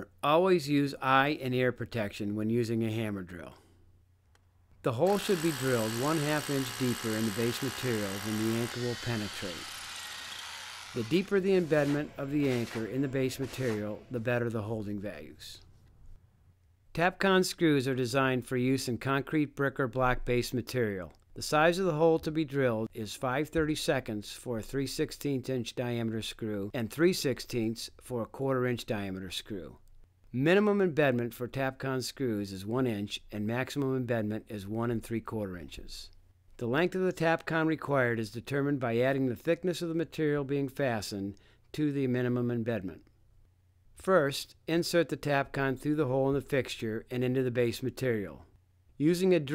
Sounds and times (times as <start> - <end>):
Drill: 5.0 - 14.2
Vacuum cleaner: 5.1 - 13.9.